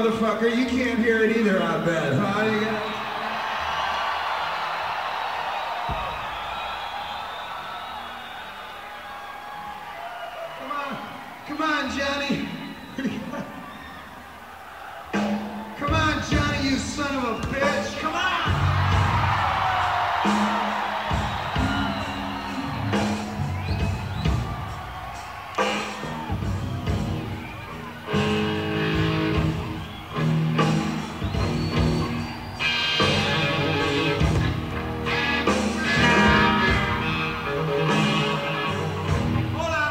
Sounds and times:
Speech: 0.0 - 2.8, 10.6 - 13.5, 15.8 - 18.6, 39.5 - 39.9
Music: 0.0 - 39.9.

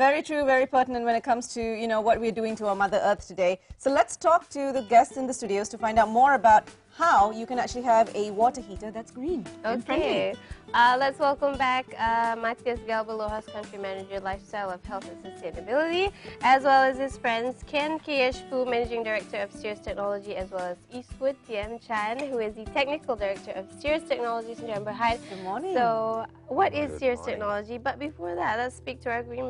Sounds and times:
Music: 0.0 - 29.4
Speech: 0.1 - 11.1, 24.0 - 29.4.

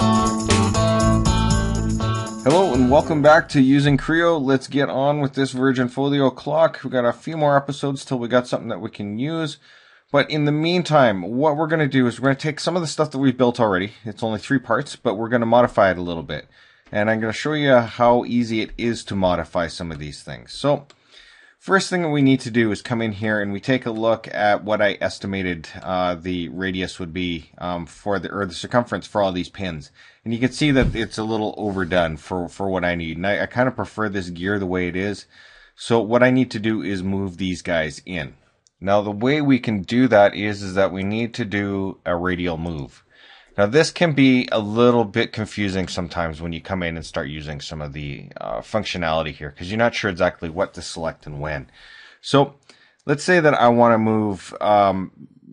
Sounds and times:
Speech: 2.5 - 20.9, 21.6 - 55.5.

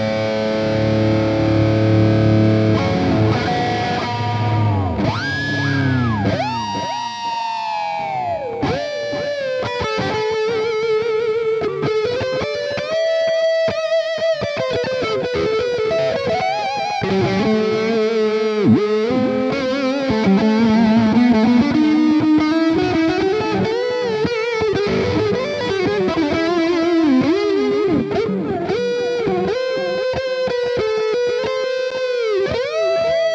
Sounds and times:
Electric guitar: 0.0 - 33.3.

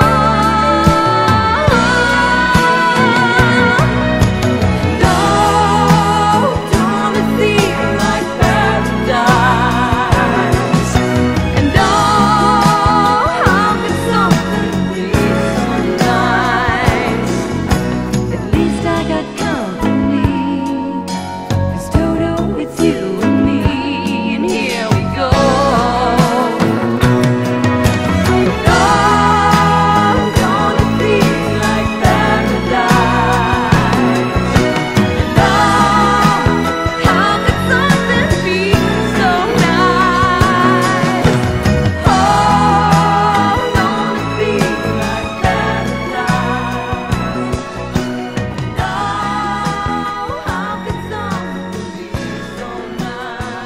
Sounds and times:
Music: 0.0 - 53.6.

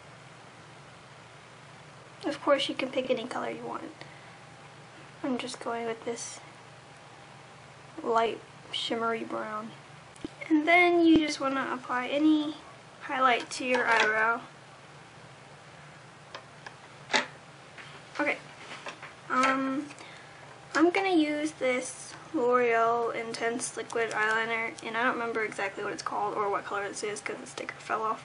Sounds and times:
Speech: 2.2 - 4.0, 5.2 - 6.5, 8.0 - 9.8, 10.4 - 14.5, 18.2 - 18.4, 19.3 - 20.0, 20.8 - 28.2.

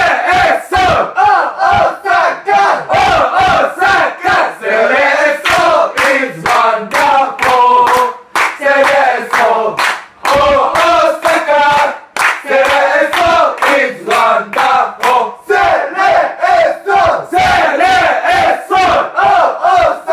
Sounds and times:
Battle cry: 0.0 - 20.1
Crowd: 0.0 - 20.1.

